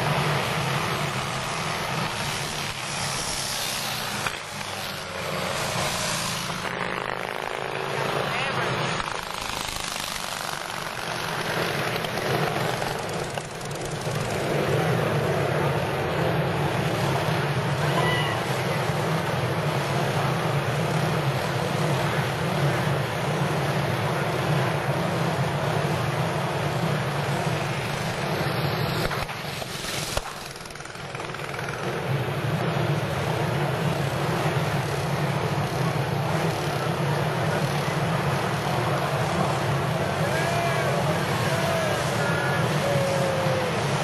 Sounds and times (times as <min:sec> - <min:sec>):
Motorcycle: 0:00.0 - 0:44.0
Race car, auto racing: 0:00.0 - 0:44.0
Speech: 0:07.9 - 0:08.9, 0:36.8 - 0:43.8.